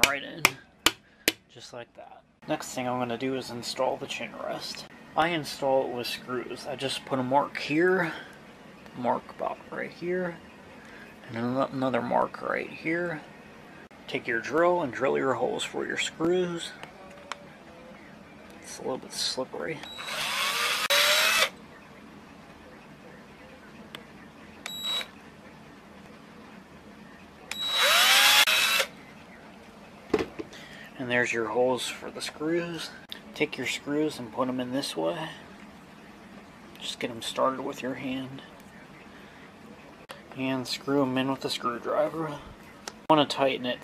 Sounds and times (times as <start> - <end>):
Speech: 0.0 - 0.6, 1.5 - 8.3, 9.0 - 10.5, 14.1 - 19.9, 31.0 - 35.5, 36.7 - 39.0, 40.1 - 43.8.